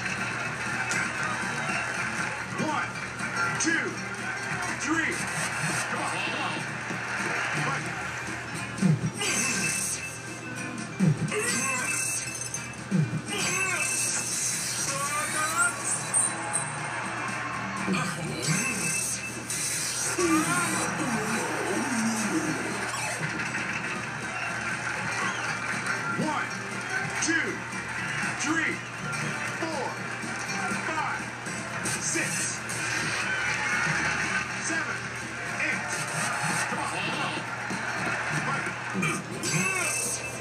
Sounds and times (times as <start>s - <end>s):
Music: 0.0s - 40.4s.